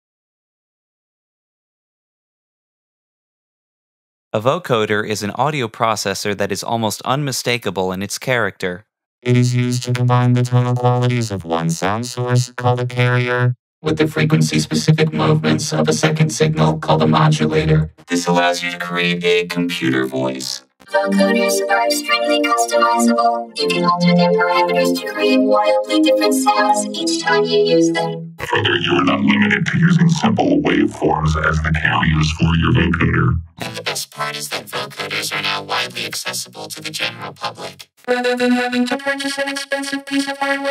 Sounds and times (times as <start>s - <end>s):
Speech: 4.4s - 13.0s, 13.9s - 23.8s, 24.6s - 37.8s
Sidetone: 9.2s - 13.6s.